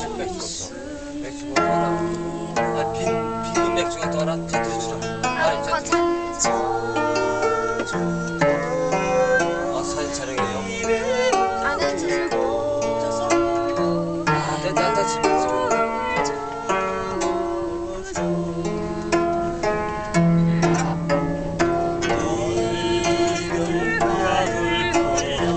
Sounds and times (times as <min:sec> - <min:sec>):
Female singing: 0:00.0 - 0:02.6, 0:06.3 - 0:19.3, 0:22.1 - 0:25.5
Choir: 0:00.0 - 0:04.2, 0:04.8 - 0:25.5
Male singing: 0:00.0 - 0:19.2, 0:22.0 - 0:25.5.